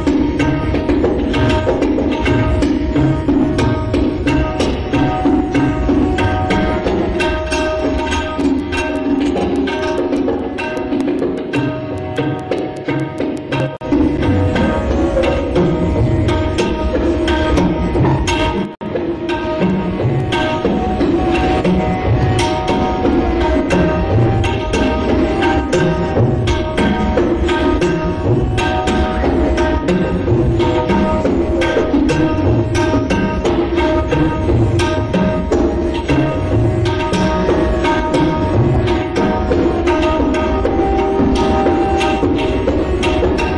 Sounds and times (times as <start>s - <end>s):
Tabla: 0.0s - 43.5s.